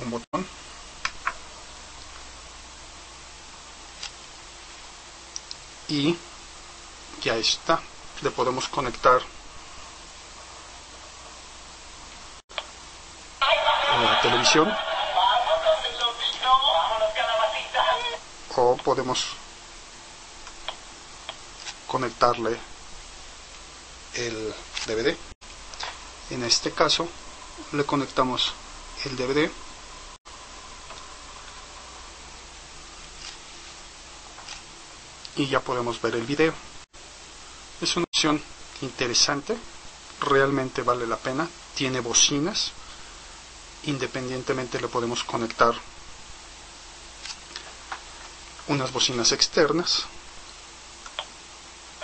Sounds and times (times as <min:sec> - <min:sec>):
Speech: 0:00.0 - 0:00.5, 0:05.9 - 0:06.3, 0:07.2 - 0:09.3, 0:13.4 - 0:19.4, 0:21.9 - 0:22.7, 0:24.1 - 0:25.3, 0:26.3 - 0:29.6, 0:35.3 - 0:36.6, 0:37.8 - 0:42.8, 0:43.8 - 0:45.9, 0:48.7 - 0:50.2
Television: 0:13.4 - 0:18.3.